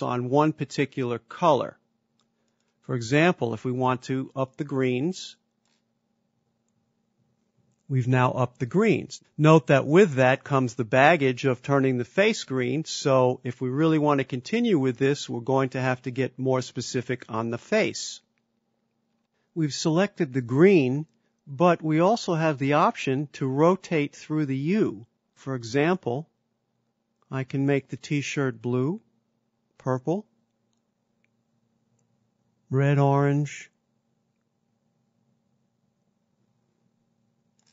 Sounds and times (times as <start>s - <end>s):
Speech: 0.0s - 1.8s, 2.8s - 5.4s, 7.9s - 18.3s, 19.6s - 26.3s, 27.2s - 29.1s, 29.8s - 30.3s, 32.7s - 33.8s.